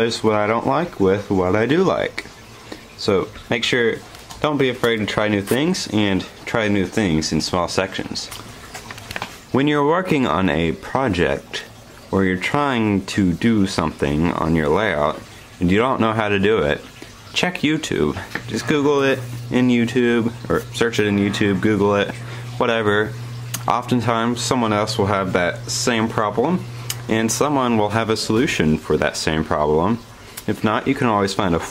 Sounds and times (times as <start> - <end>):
Speech: 0.0 - 2.3, 3.0 - 8.4, 9.5 - 31.7.